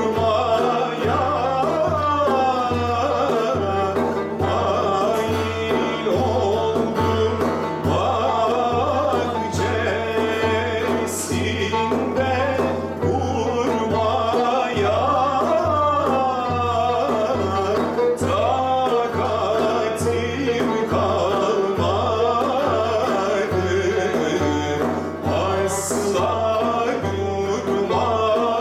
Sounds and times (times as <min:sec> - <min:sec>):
Traditional music: 0:00.0 - 0:28.6.